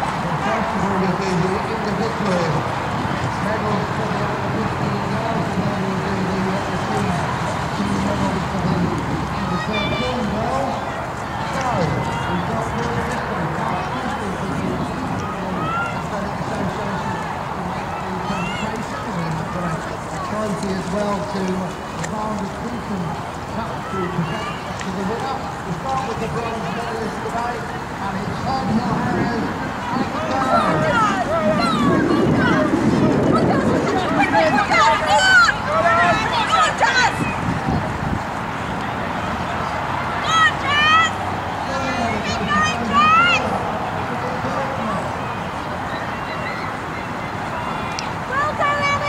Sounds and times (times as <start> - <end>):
Speech: 3.4 - 37.4.